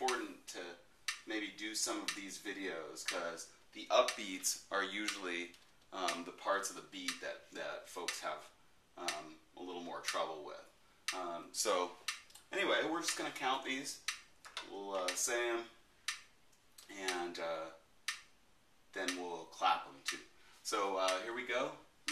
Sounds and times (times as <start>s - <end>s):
Speech: 0.0s - 15.8s, 16.8s - 17.8s, 18.9s - 22.1s.